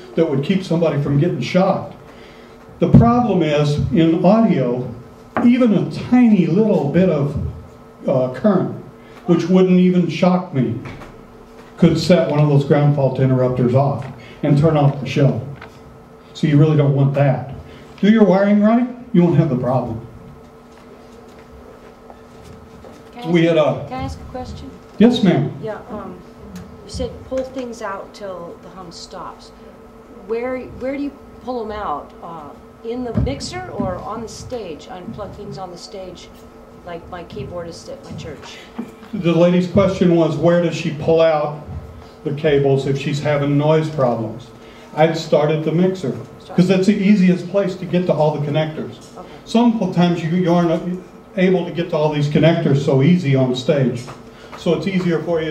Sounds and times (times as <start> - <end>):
Speech: 2.8 - 7.5, 23.2 - 26.3, 26.9 - 29.6, 30.2 - 36.3, 36.9 - 38.6, 42.3 - 55.5.